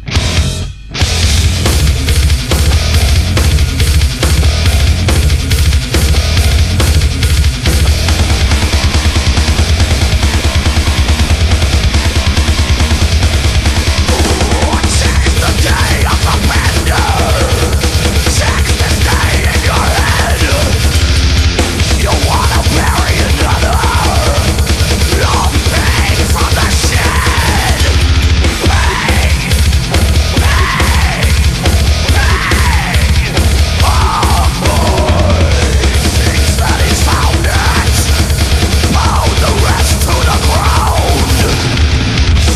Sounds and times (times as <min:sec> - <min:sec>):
Music: 0:00.0 - 0:42.5.